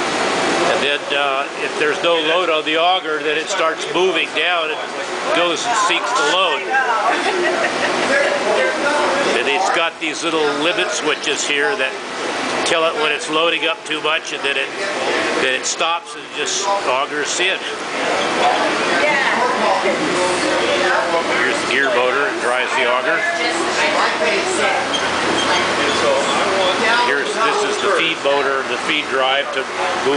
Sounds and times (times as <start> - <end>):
Speech: 0.7 - 12.0, 12.6 - 30.1.